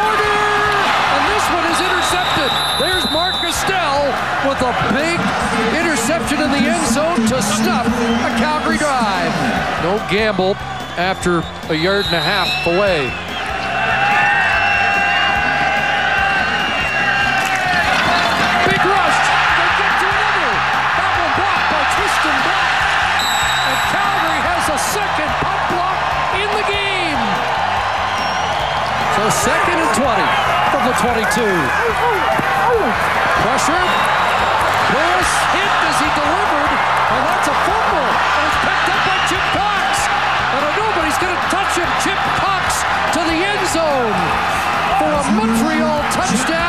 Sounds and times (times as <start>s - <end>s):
Speech: 0.0s - 13.1s, 18.6s - 22.6s, 23.7s - 27.3s, 45.0s - 46.6s
Music: 0.0s - 46.6s.